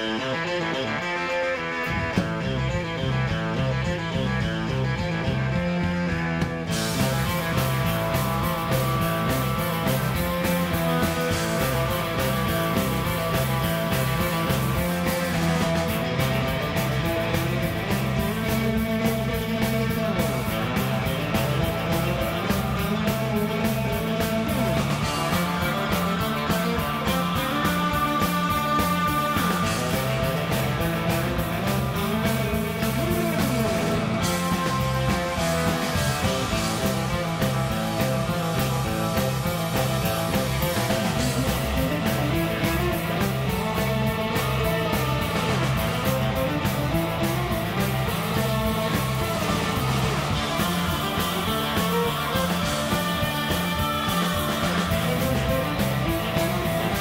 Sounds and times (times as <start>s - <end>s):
Guitar: 0.0s - 57.0s.